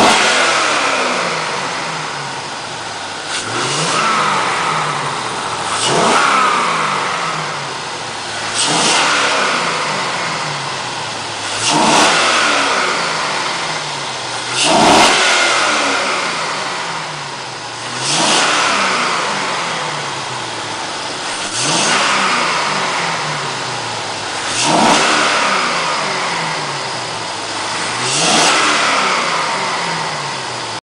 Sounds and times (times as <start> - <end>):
Accelerating, revving, vroom: 0.0 - 2.1, 3.3 - 7.6, 8.4 - 10.6, 11.4 - 17.1, 17.8 - 20.1, 21.3 - 23.6, 24.4 - 30.8
Vehicle: 0.0 - 30.8.